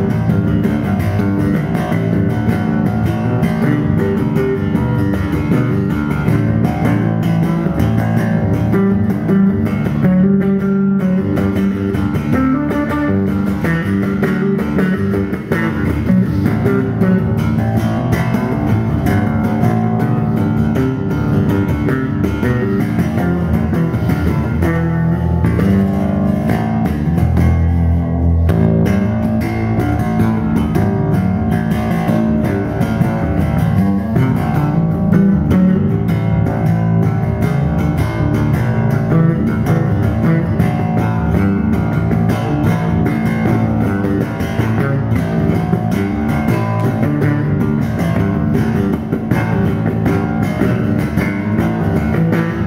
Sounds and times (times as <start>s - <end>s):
Bass guitar: 0.0s - 52.6s.